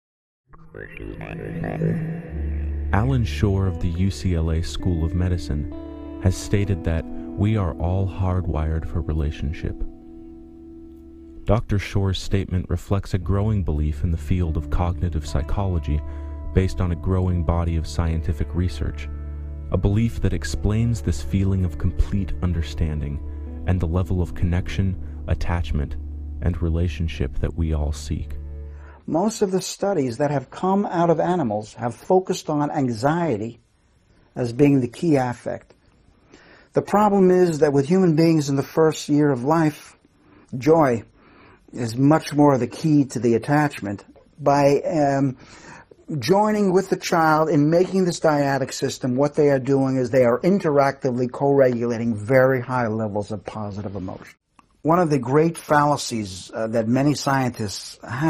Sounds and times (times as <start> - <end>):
Speech: 0.6 - 2.2, 2.9 - 9.9, 11.5 - 19.1, 19.7 - 28.4, 29.0 - 33.6, 34.4 - 35.7, 36.7 - 41.1, 41.7 - 58.2
Music: 0.8 - 29.0.